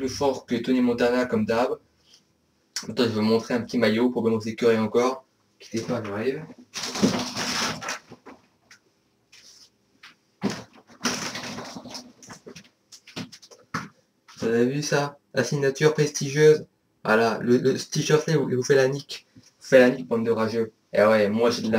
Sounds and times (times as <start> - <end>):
Speech: 0.0 - 1.8, 2.8 - 6.5, 14.4 - 21.7.